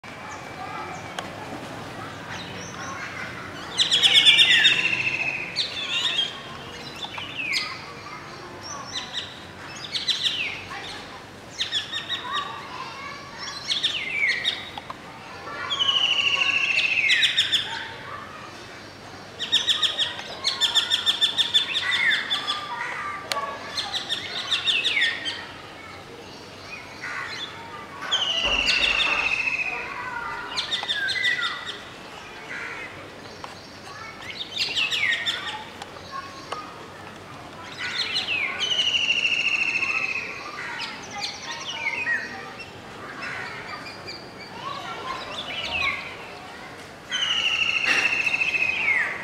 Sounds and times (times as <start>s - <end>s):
Environmental noise: 0.0s - 49.2s
Outside, rural or natural: 0.0s - 49.2s
Speech: 0.0s - 49.2s
Bird vocalization, bird call, bird song: 2.3s - 12.8s, 13.4s - 14.8s, 15.5s - 17.9s, 18.5s - 25.5s, 26.2s - 36.7s, 37.6s - 46.4s, 47.1s - 49.2s.